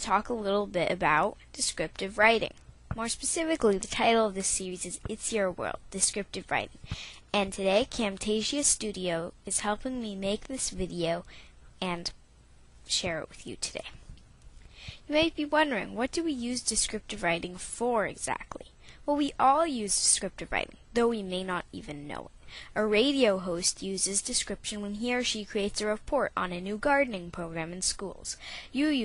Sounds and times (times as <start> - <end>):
Speech: 0.0 - 12.2, 12.9 - 14.0, 15.1 - 29.0.